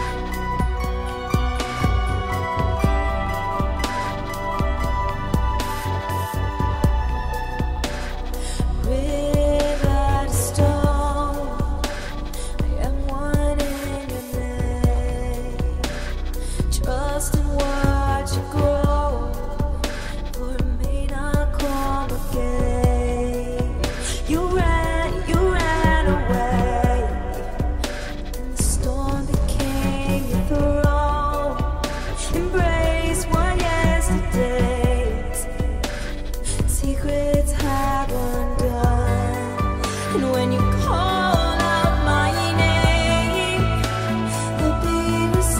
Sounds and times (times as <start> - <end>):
Soul music: 0.0 - 45.5.